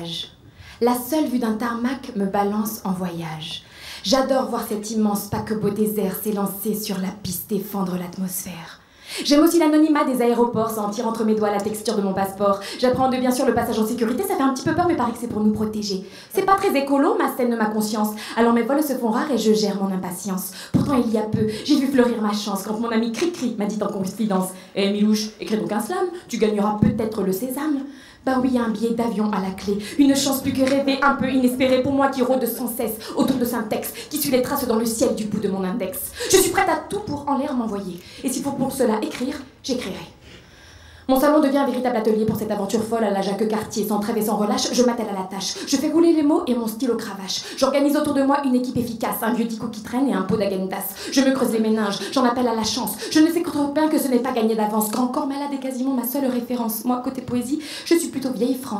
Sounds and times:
Speech: 0.0 - 40.2, 41.1 - 58.8.

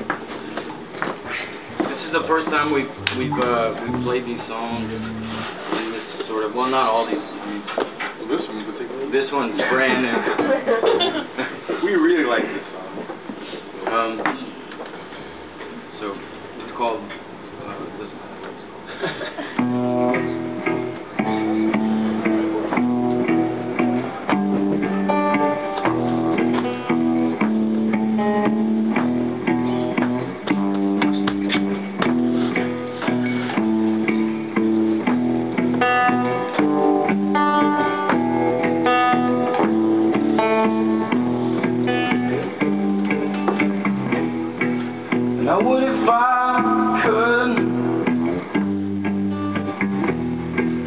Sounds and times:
Music: 2.4 - 5.5, 19.5 - 50.8.

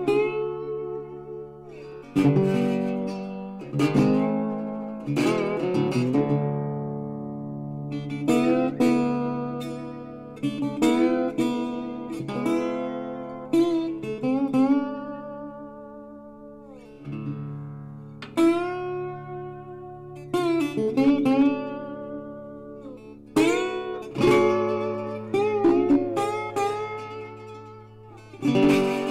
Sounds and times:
Acoustic guitar: 0.0 - 29.1
Strum: 0.0 - 29.1.

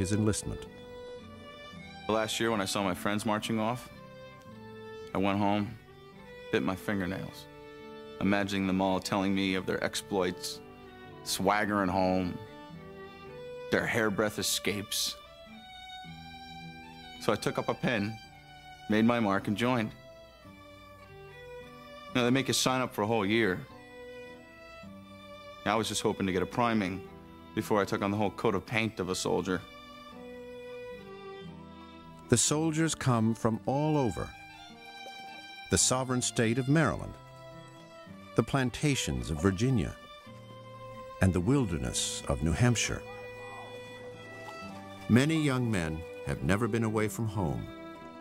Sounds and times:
Violin, fiddle: 0.0 - 48.2.

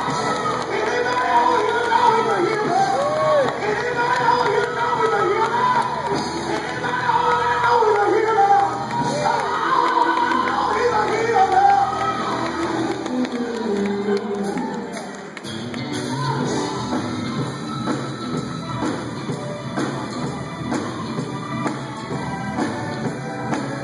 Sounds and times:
Male singing: 0.0 - 15.0
Music: 0.0 - 23.8.

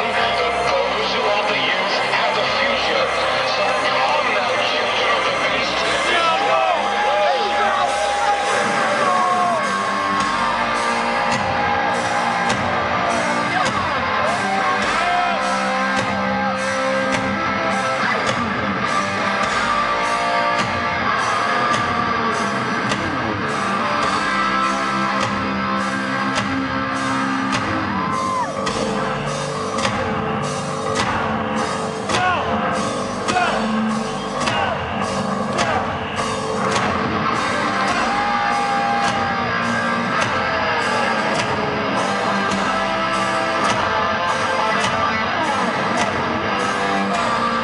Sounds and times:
Speech: 0.0 - 9.4, 32.1 - 32.6, 33.3 - 33.7
Music: 0.0 - 47.6.

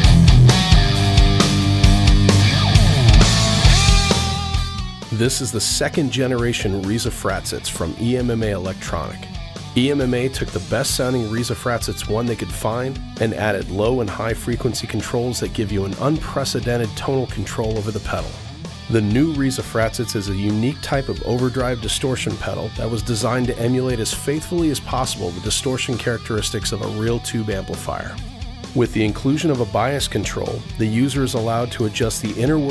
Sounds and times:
Heavy metal: 0.0 - 32.7
Speech: 5.1 - 28.2, 28.8 - 32.7.

